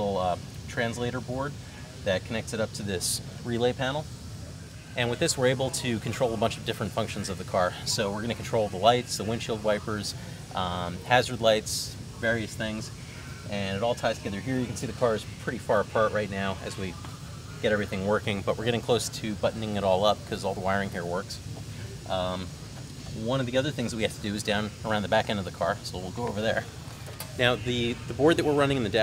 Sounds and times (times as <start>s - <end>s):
Speech: 0.0s - 4.1s, 4.9s - 22.5s, 23.1s - 29.0s.